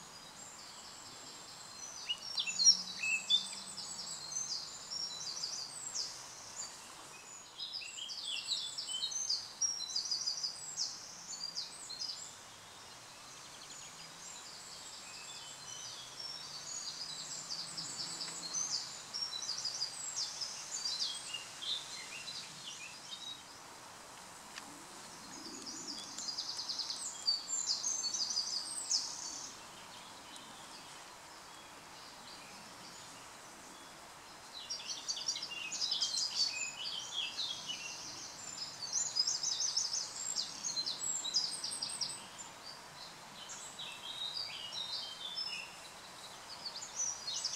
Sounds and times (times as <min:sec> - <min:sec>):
Environmental noise: 0:00.0 - 0:47.5
Insect: 0:00.0 - 0:47.5.